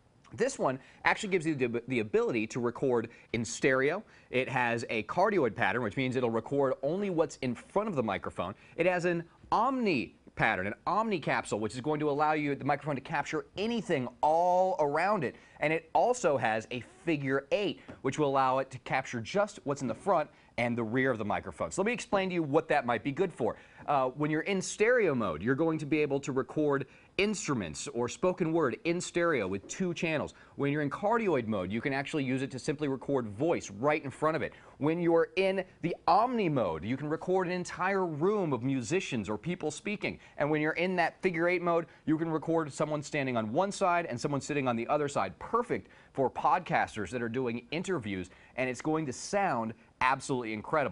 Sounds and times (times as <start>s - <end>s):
Speech: 0.3s - 50.9s.